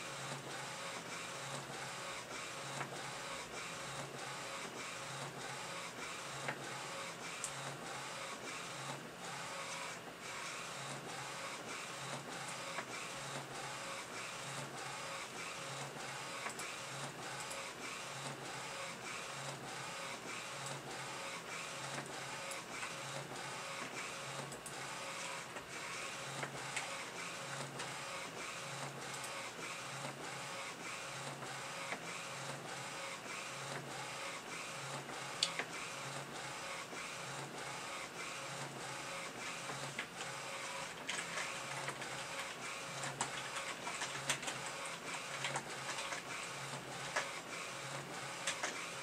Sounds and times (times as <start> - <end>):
Printer: 0.0 - 49.0.